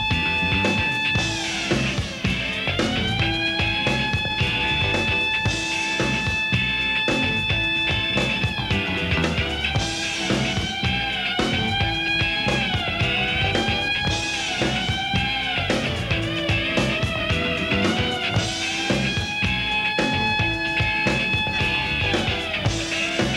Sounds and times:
Music: 0.0s - 23.3s.

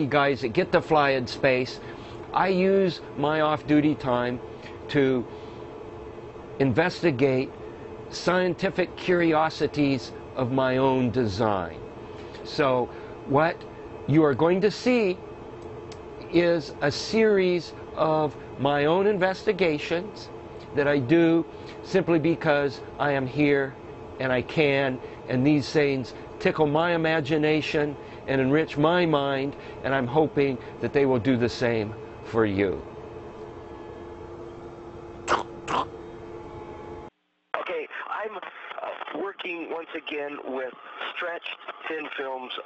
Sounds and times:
Speech: 0.0s - 5.3s, 6.6s - 7.5s, 8.1s - 11.8s, 12.5s - 15.2s, 16.3s - 32.9s, 37.6s - 42.6s.

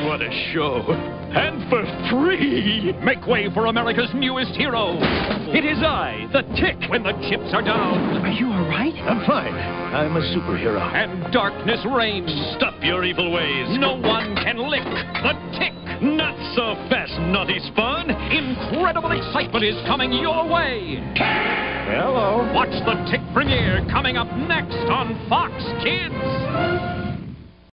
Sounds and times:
Music: 0.0s - 27.7s
Speech: 21.9s - 26.2s.

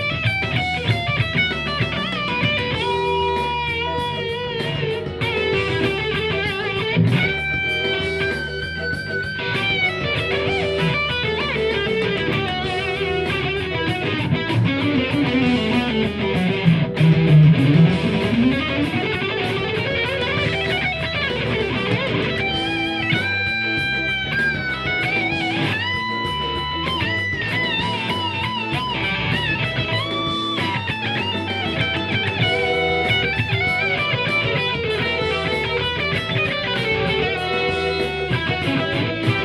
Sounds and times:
Guitar: 0.0s - 39.4s.

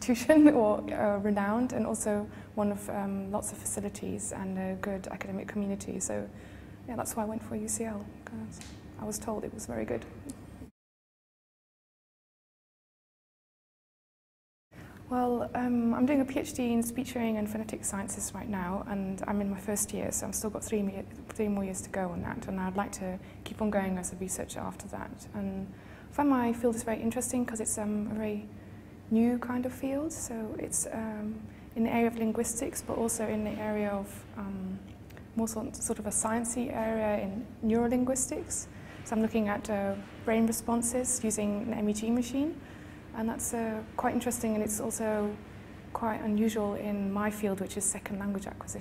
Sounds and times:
Female speech, woman speaking: 0.0s - 10.3s, 15.1s - 28.5s, 29.1s - 42.6s, 43.2s - 48.8s.

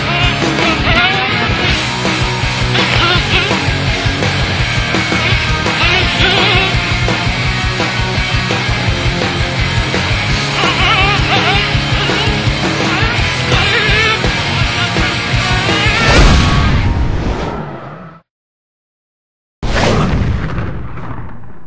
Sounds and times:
Music: 0.0s - 16.8s.

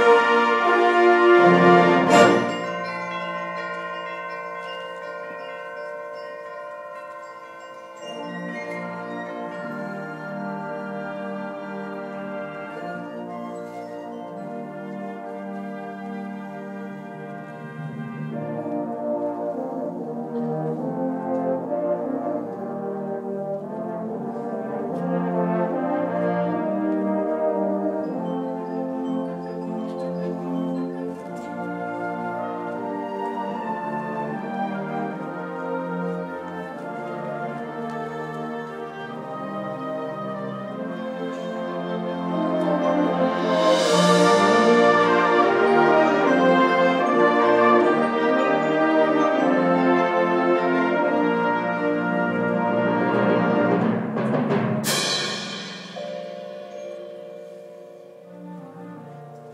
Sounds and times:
Bell: 0.0s - 59.5s
Inside, public space: 0.0s - 59.5s.

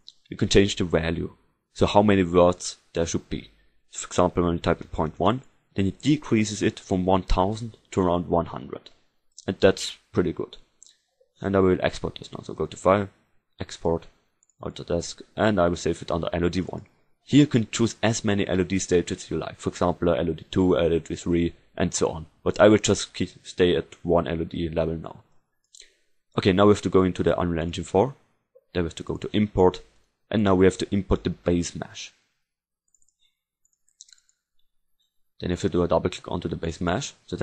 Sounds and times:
Speech: 0.0s - 10.7s, 11.4s - 32.2s, 35.4s - 37.4s.

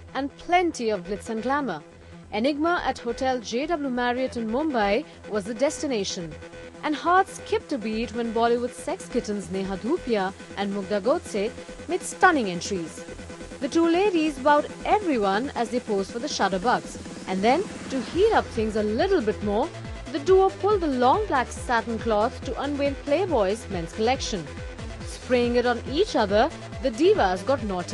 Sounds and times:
Music: 0.0s - 27.9s
Speech: 0.2s - 1.8s, 2.4s - 13.0s, 13.6s - 24.5s, 25.1s - 27.9s.

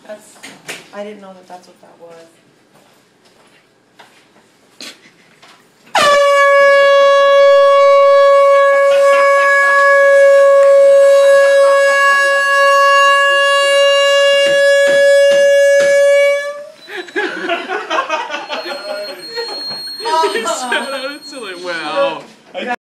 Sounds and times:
Inside, small room: 0.0s - 22.8s
Air horn, truck horn: 5.9s - 16.8s
Vehicle horn, car horn, honking: 5.9s - 16.8s, 18.6s - 22.1s.

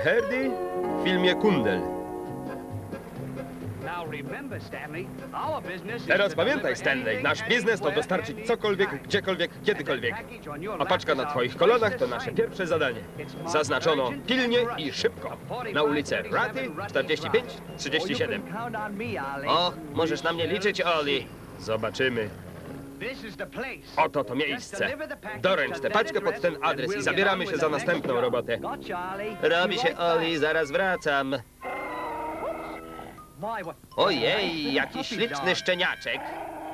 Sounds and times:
Speech: 0.0s - 1.9s, 3.9s - 22.3s, 23.0s - 31.4s, 33.4s - 36.3s.

